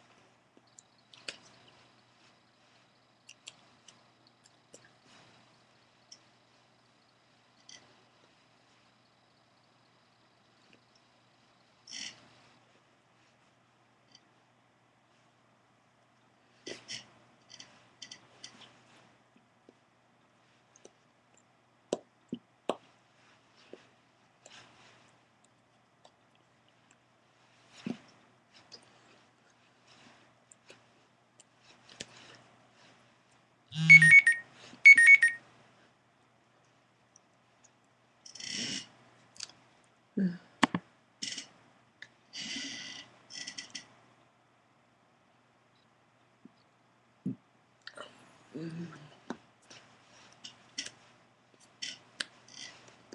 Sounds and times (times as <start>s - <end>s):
Inside, small room: 0.0s - 53.1s.